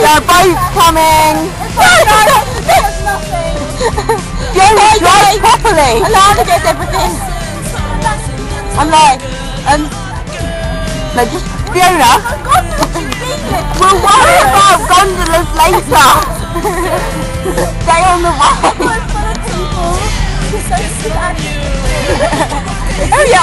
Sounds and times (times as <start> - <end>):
Music: 0.0 - 23.4.